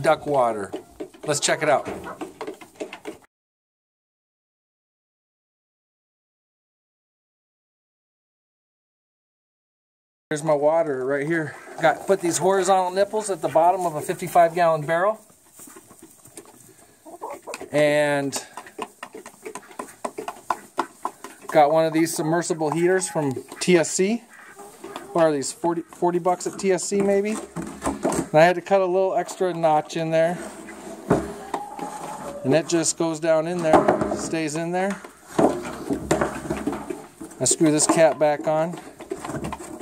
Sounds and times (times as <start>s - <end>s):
Cluck: 0.7s - 3.2s, 11.5s - 14.5s, 15.4s - 17.8s, 18.4s - 27.2s, 30.4s - 32.4s.